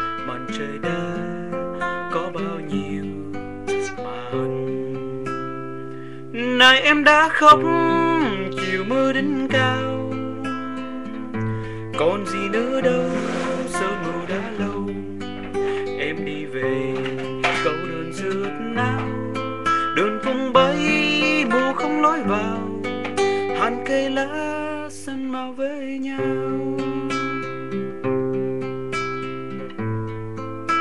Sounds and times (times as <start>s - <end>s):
Music: 0.0s - 30.8s
Male singing: 0.1s - 4.7s, 6.4s - 27.7s.